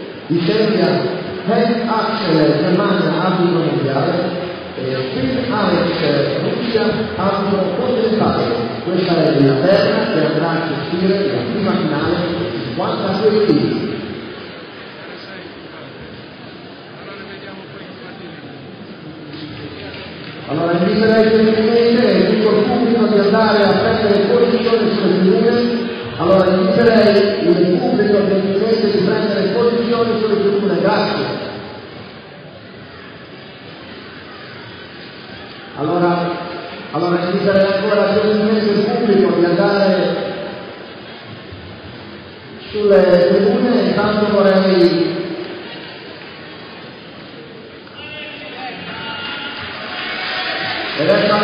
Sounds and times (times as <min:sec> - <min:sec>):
Speech: 0:00.3 - 0:14.0, 0:16.9 - 0:31.5, 0:35.7 - 0:40.5, 0:42.7 - 0:45.3, 0:50.4 - 0:51.4.